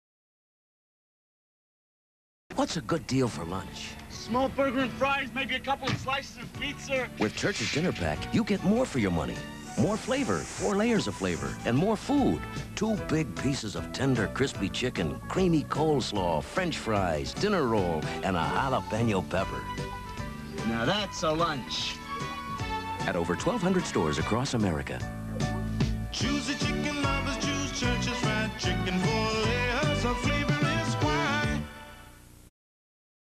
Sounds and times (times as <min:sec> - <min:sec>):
Speech: 0:02.5 - 0:19.6, 0:20.6 - 0:22.0, 0:23.0 - 0:25.1
Music: 0:02.6 - 0:32.5.